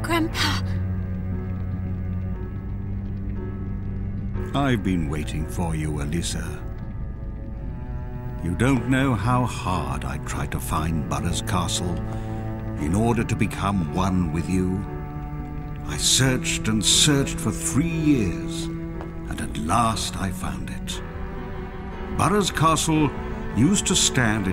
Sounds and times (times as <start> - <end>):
Speech: 0.0 - 0.8, 4.5 - 6.6, 8.4 - 12.0, 12.8 - 14.9, 15.9 - 18.7, 19.3 - 21.0, 22.2 - 24.5
Music: 0.0 - 24.5.